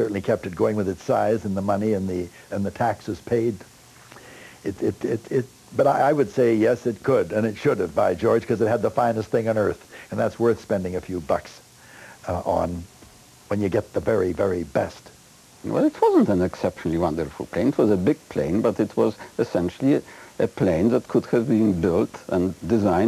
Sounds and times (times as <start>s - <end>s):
Speech: 0.0s - 3.7s, 4.6s - 11.6s, 12.2s - 12.9s, 13.5s - 23.0s.